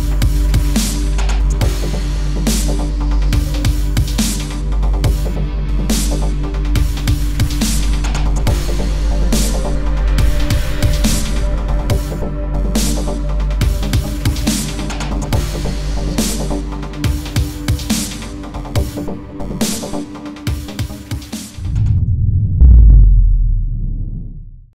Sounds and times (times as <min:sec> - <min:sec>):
Music: 0:00.0 - 0:22.0.